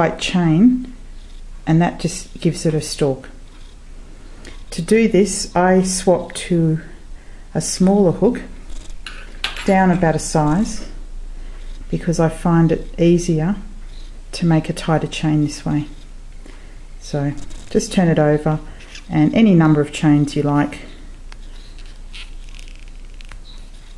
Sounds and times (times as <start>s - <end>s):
Speech: 0.0s - 1.0s, 1.7s - 3.4s, 4.7s - 7.0s, 7.6s - 8.6s, 9.6s - 11.0s, 11.9s - 13.7s, 14.3s - 16.0s, 17.0s - 20.9s
Inside, small room: 0.0s - 23.9s.